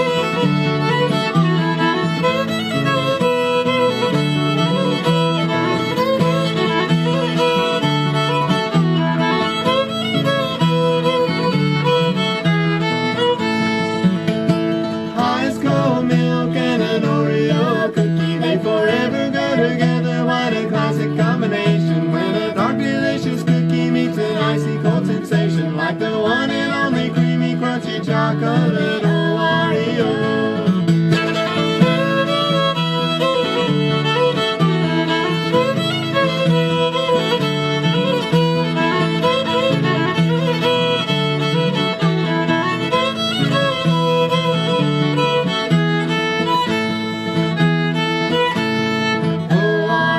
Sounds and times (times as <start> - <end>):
Music: 0.0 - 50.1.